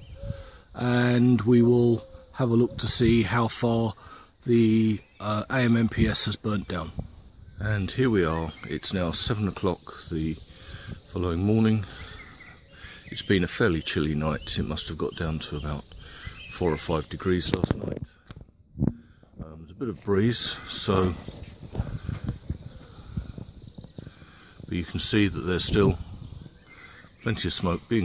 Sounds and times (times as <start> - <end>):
Outside, rural or natural: 0.0 - 28.0
Speech: 0.8 - 7.0, 7.6 - 10.5, 11.1 - 11.9, 13.1 - 15.9, 16.5 - 18.1, 19.4 - 21.4, 24.7 - 26.1, 27.2 - 28.0.